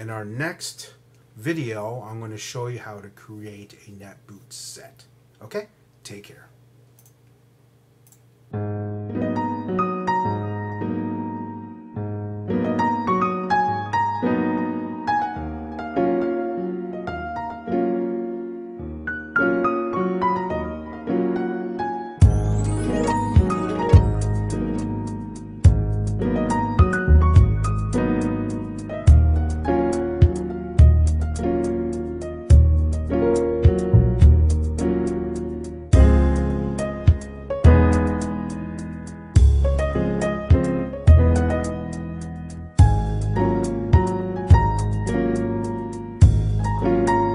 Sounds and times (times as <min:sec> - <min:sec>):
Speech: 0:00.0 - 0:06.6
Electric piano: 0:08.5 - 0:47.3.